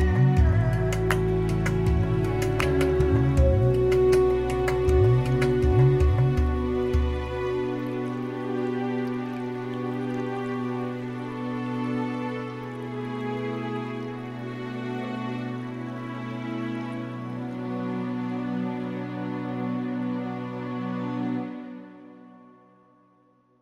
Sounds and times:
Music: 0:00.0 - 0:23.6.

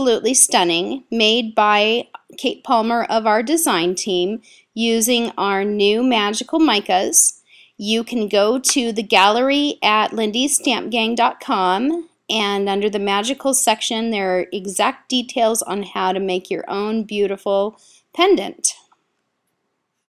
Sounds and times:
Speech: 0:00.0 - 0:18.8.

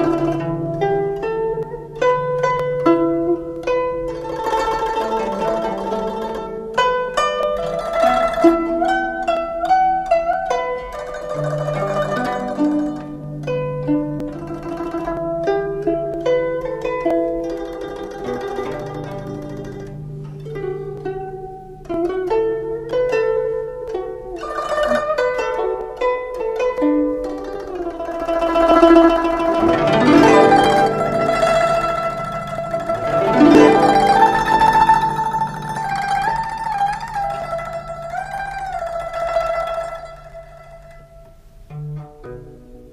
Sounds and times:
Harp: 0:00.0 - 0:42.9.

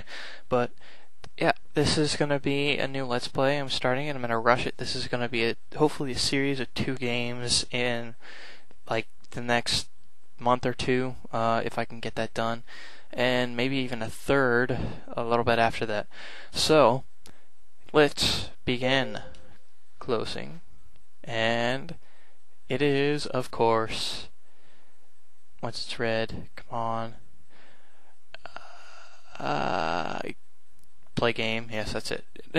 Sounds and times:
Speech: 0:00.0 - 0:00.7, 0:01.3 - 0:08.2, 0:08.9 - 0:17.1, 0:17.9 - 0:19.4, 0:20.0 - 0:20.6, 0:21.3 - 0:22.0, 0:22.7 - 0:24.3, 0:25.6 - 0:27.2, 0:28.4 - 0:30.4, 0:31.2 - 0:32.5.

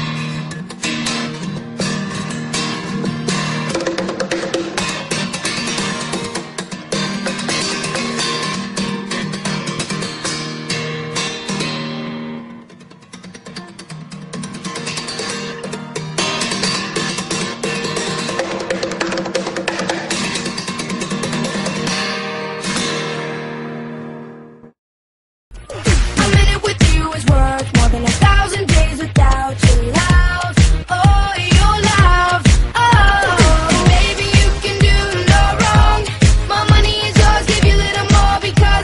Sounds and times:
Music: 0:00.0 - 0:24.8, 0:25.5 - 0:38.8.

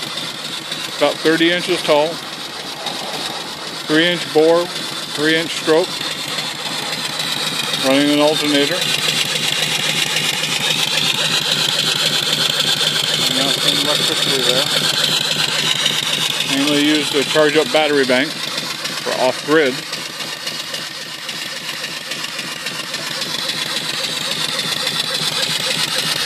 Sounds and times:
Engine: 0:00.0 - 0:26.2
Speech: 0:01.0 - 0:02.2, 0:03.9 - 0:05.9, 0:07.8 - 0:08.8, 0:13.2 - 0:14.8, 0:16.5 - 0:18.4, 0:19.1 - 0:19.8.

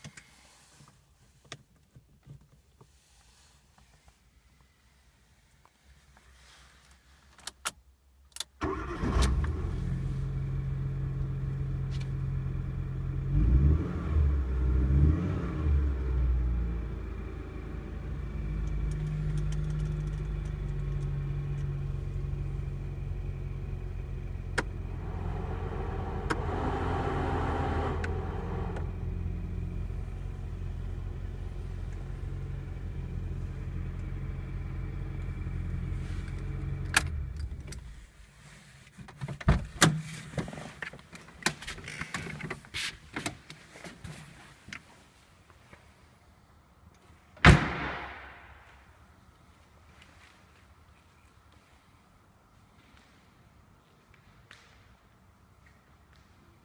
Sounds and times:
Car: 0:00.0 - 0:56.6.

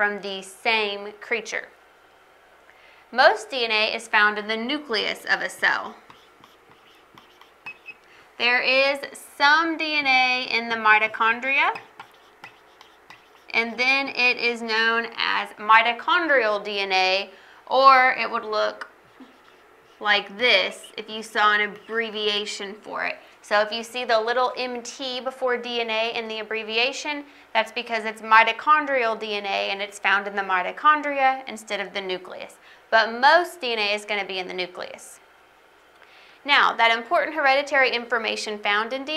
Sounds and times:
Speech: 0:00.0 - 0:01.8, 0:03.1 - 0:06.0, 0:08.4 - 0:11.9, 0:13.5 - 0:18.9, 0:20.0 - 0:35.2, 0:36.5 - 0:39.1
Inside, small room: 0:00.0 - 0:39.1.

